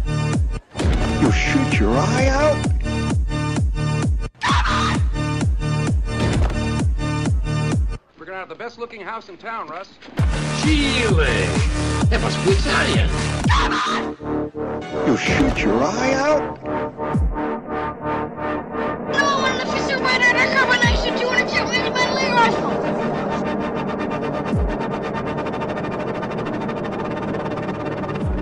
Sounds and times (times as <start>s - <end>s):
Speech: 1.2s - 2.6s, 8.2s - 10.0s, 10.6s - 13.2s, 15.0s - 16.5s, 19.2s - 22.8s.